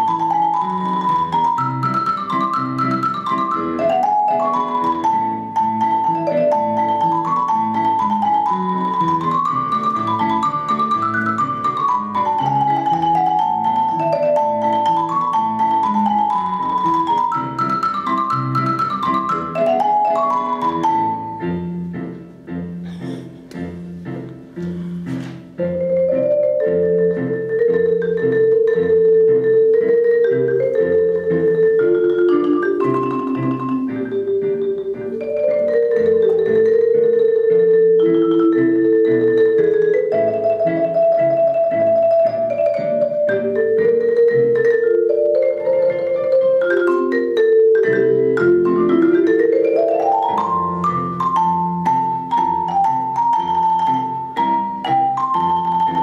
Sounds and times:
Vibraphone: 0:00.0 - 0:22.2, 0:22.8 - 0:56.0.

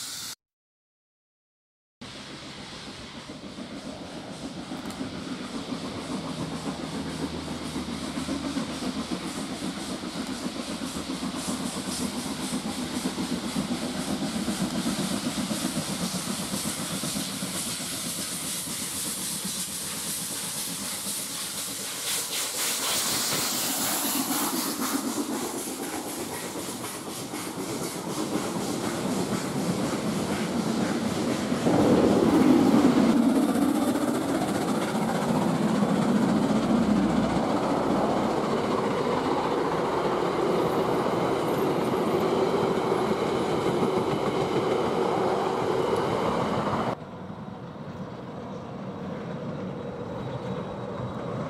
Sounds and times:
Hiss: 0:00.0 - 0:00.4, 0:02.0 - 0:47.0.

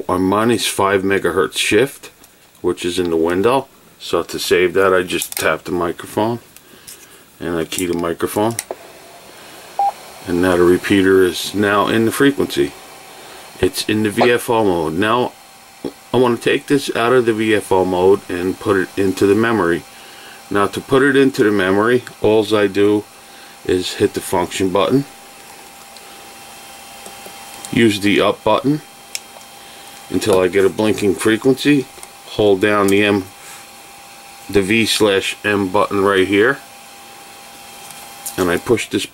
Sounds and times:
Speech: 0:00.0 - 0:06.5, 0:07.4 - 0:08.6, 0:10.2 - 0:12.8, 0:13.6 - 0:15.4, 0:16.1 - 0:19.8, 0:20.5 - 0:25.1, 0:27.7 - 0:28.9, 0:30.1 - 0:33.4, 0:34.5 - 0:36.7, 0:38.3 - 0:39.1.

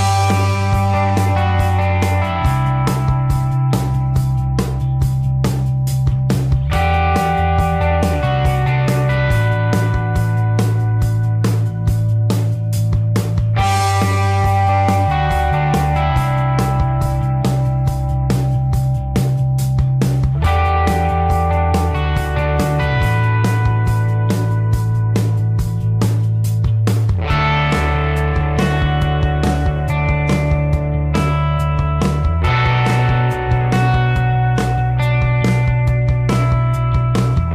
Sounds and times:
Music: 0:00.0 - 0:37.5.

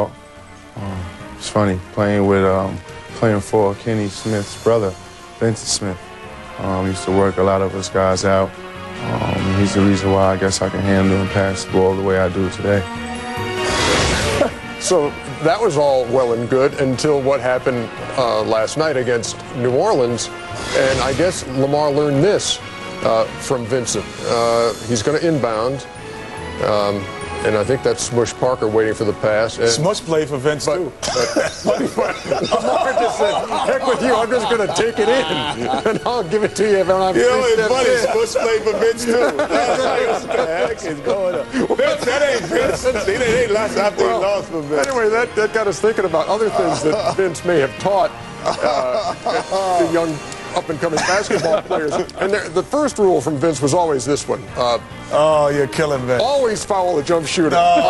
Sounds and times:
Music: 0:00.0 - 0:57.9.

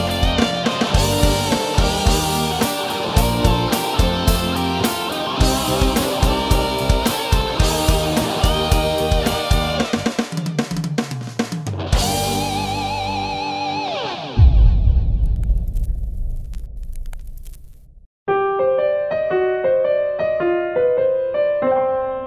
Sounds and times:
Bass drum: 0:00.0 - 0:04.8, 0:05.4 - 0:10.1, 0:14.4 - 0:17.4
Drum kit: 0:00.0 - 0:16.6.

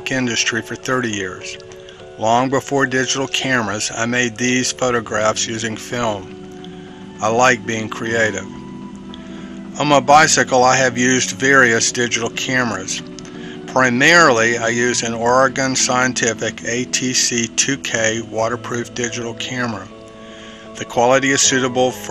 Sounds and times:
Speech: 0:00.0 - 0:01.6, 0:02.2 - 0:06.3, 0:07.2 - 0:08.5, 0:09.8 - 0:13.1, 0:13.7 - 0:19.9, 0:20.8 - 0:22.1
Music: 0:00.0 - 0:22.1.

